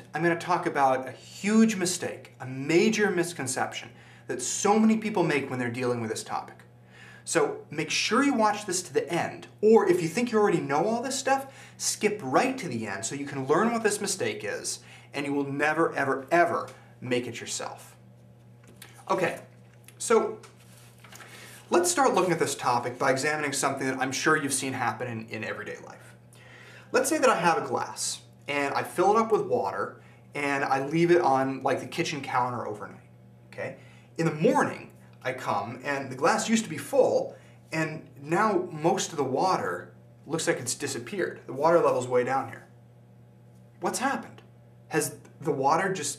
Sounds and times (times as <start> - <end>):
Speech: 0.0 - 6.7, 7.3 - 18.0, 19.0 - 20.4, 21.7 - 26.2, 26.9 - 33.0, 33.6 - 42.7, 43.8 - 46.1.